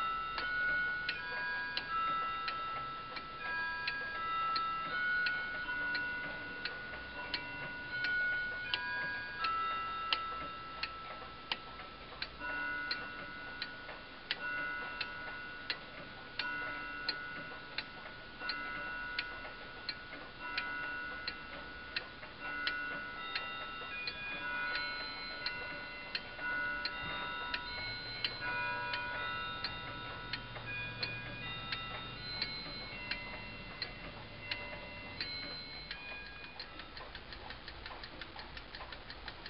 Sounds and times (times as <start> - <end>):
Tick-tock: 0.0 - 39.5.